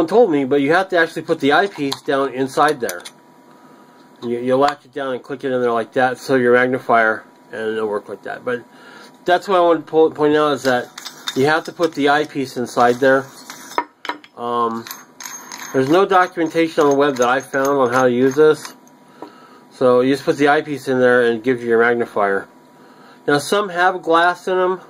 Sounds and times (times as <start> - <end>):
Speech: 0.0 - 3.0, 4.2 - 13.3, 14.4 - 14.9, 15.8 - 18.8, 19.8 - 22.5, 23.3 - 24.9.